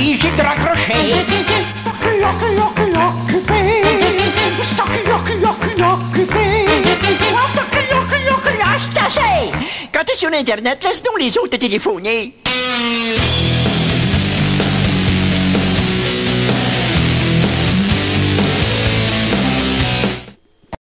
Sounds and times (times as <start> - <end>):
Music: 0.0 - 9.7, 12.4 - 20.4
Speech: 8.6 - 12.4.